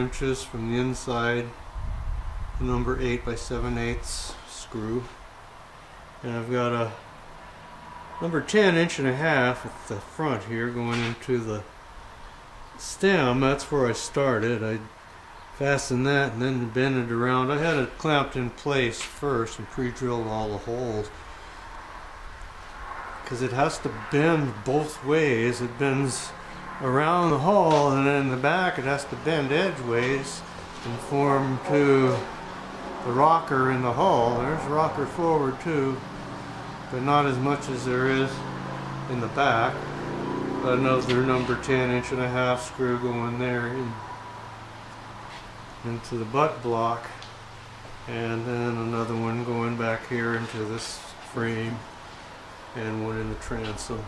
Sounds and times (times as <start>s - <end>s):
Speech: 0.0s - 1.6s, 2.6s - 5.2s, 6.2s - 7.0s, 8.2s - 11.7s, 12.8s - 14.9s, 15.6s - 21.2s, 23.3s - 32.3s, 33.0s - 36.0s, 36.9s - 38.5s, 39.1s - 39.8s, 40.6s - 44.0s, 45.8s - 47.3s, 48.1s - 51.9s, 52.8s - 54.0s.